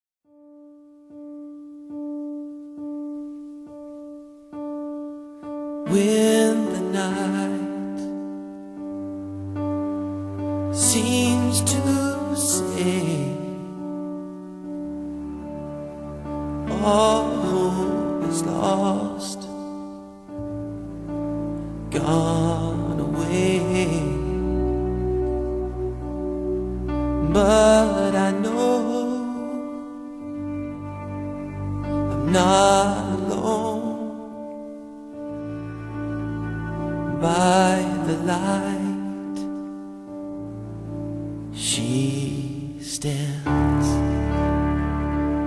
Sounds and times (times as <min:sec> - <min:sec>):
Electric piano: 0:00.3 - 0:45.4.